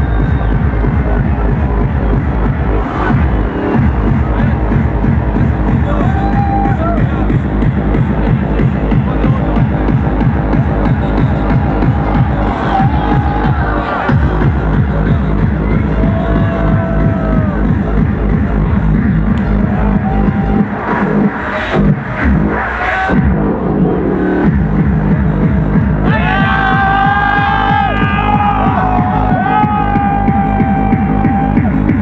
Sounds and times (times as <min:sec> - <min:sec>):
Techno: 0:00.0 - 0:32.0.